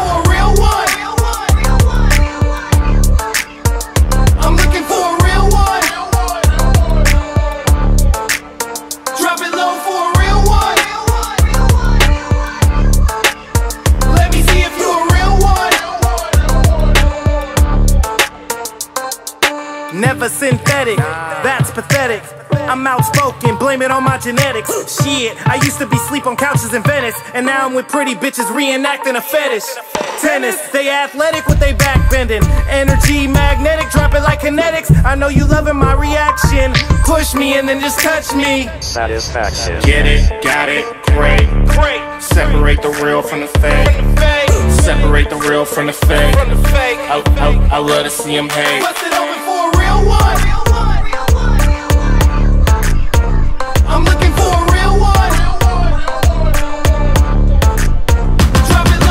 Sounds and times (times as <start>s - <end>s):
Pop music: 0.0s - 59.1s.